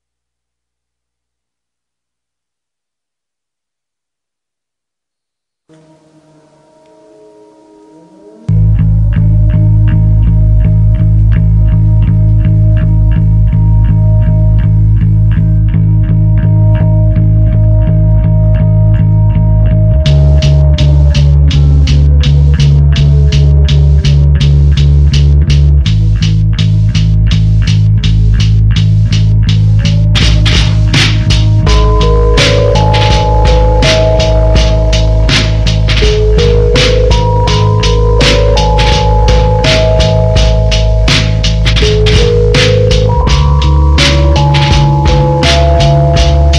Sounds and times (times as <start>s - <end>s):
Music: 5.7s - 46.5s.